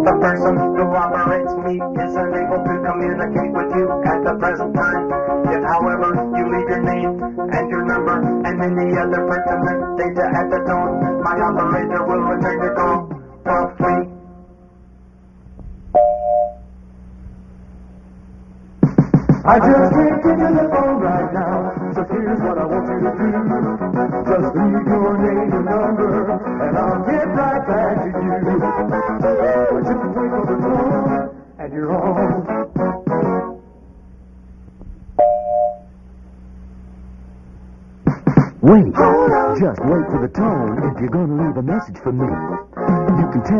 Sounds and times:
Music: 0:00.0 - 0:14.8, 0:18.8 - 0:34.2, 0:38.0 - 0:43.6.

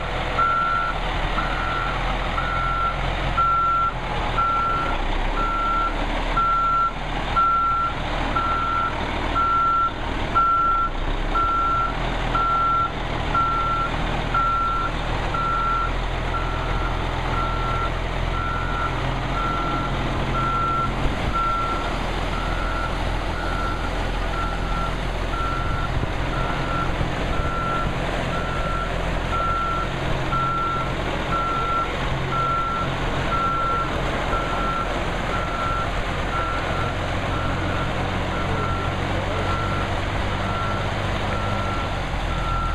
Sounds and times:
Truck: 0:00.0 - 0:42.7.

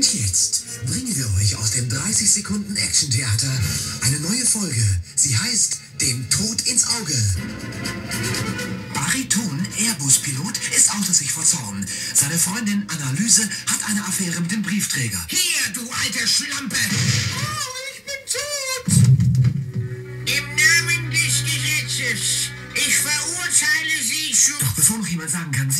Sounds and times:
Speech: 0:00.0 - 0:07.4, 0:08.9 - 0:19.0, 0:20.3 - 0:25.8
Radio: 0:00.0 - 0:07.5, 0:08.1 - 0:19.2, 0:19.8 - 0:25.8
Music: 0:00.0 - 0:25.8.

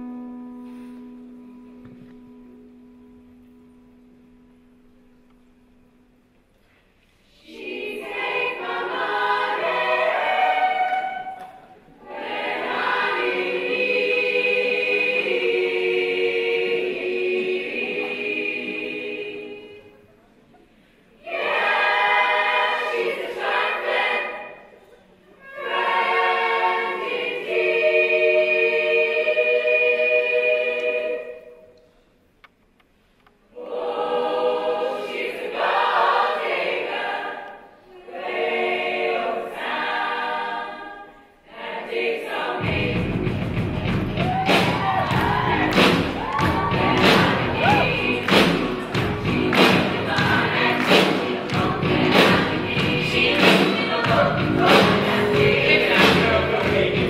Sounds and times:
Choir: 0:07.1 - 0:20.3, 0:20.9 - 0:31.9, 0:33.5 - 0:57.0.

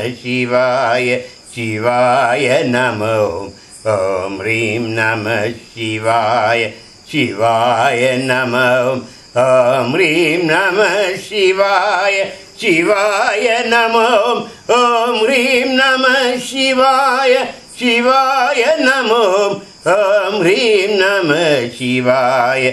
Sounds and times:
Mantra: 0:00.0 - 0:22.7.

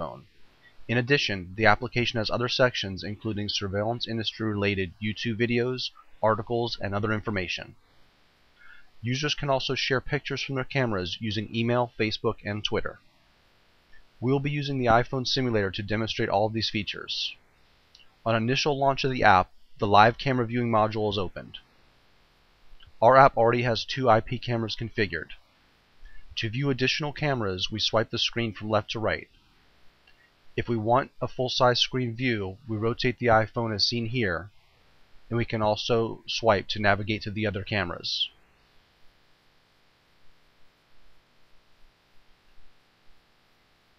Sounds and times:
Speech: 0:00.0 - 0:00.3, 0:00.9 - 0:07.8, 0:09.0 - 0:13.0, 0:14.2 - 0:17.4, 0:18.0 - 0:21.6, 0:22.8 - 0:25.4, 0:26.4 - 0:29.4, 0:30.6 - 0:34.6, 0:35.3 - 0:38.4.

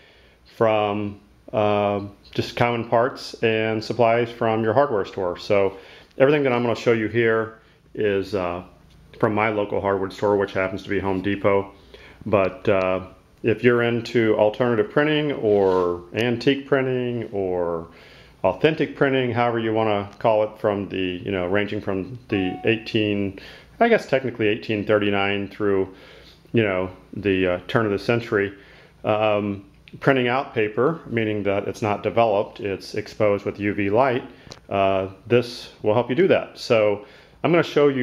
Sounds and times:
Speech: 0:00.5 - 0:38.0.

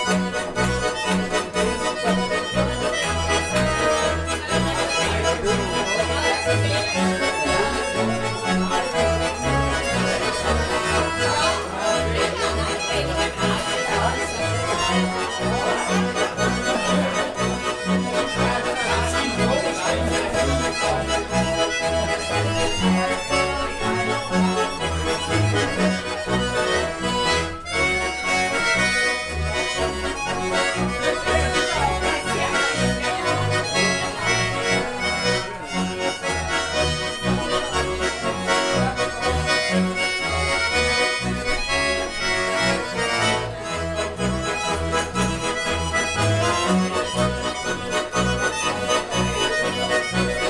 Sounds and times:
Music: 0:00.0 - 0:50.5.

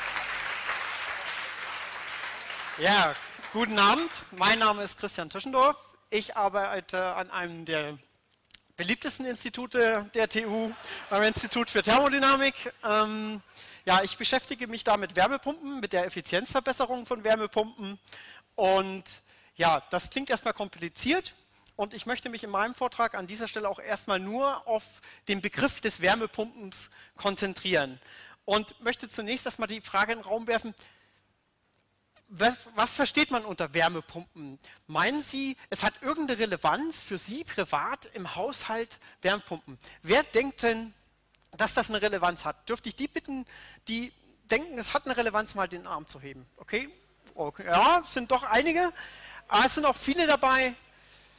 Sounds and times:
Speech: 0:02.8 - 0:08.0, 0:08.8 - 0:18.0, 0:18.6 - 0:30.8, 0:32.3 - 0:41.0, 0:41.6 - 0:50.8.

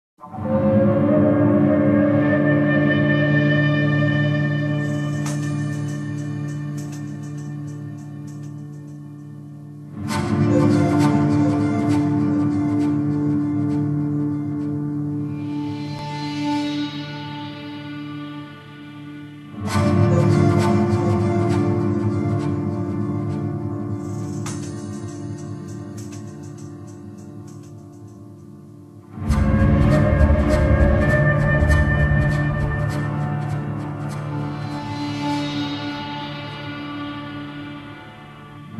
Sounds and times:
Theremin: 0:00.2 - 0:09.1, 0:10.0 - 0:27.4, 0:29.1 - 0:38.7.

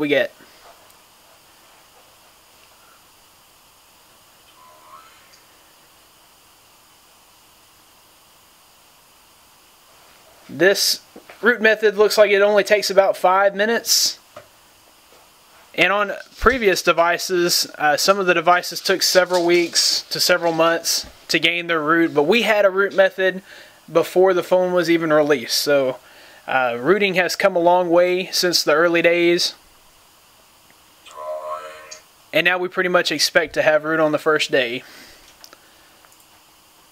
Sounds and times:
Speech: 0:00.0 - 0:00.4, 0:10.5 - 0:14.2, 0:15.8 - 0:29.6, 0:32.4 - 0:34.9.

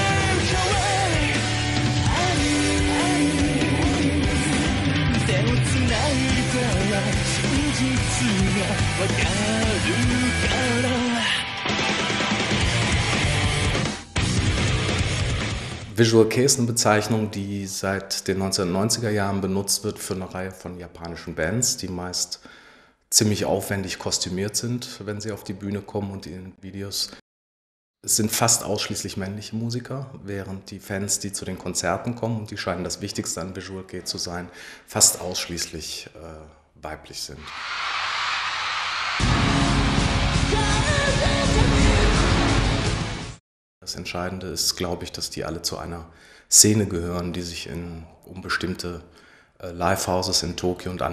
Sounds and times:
Speech: 0:15.9 - 0:22.4, 0:23.1 - 0:27.2, 0:28.1 - 0:37.5, 0:43.8 - 0:51.1.

